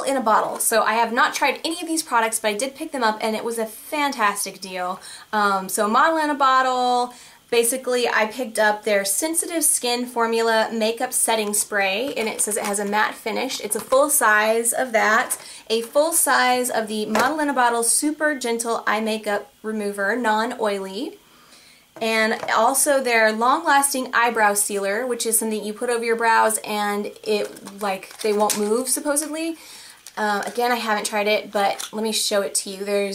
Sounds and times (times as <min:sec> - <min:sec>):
Speech: 0:00.0 - 0:21.2, 0:22.0 - 0:29.6, 0:30.2 - 0:33.1.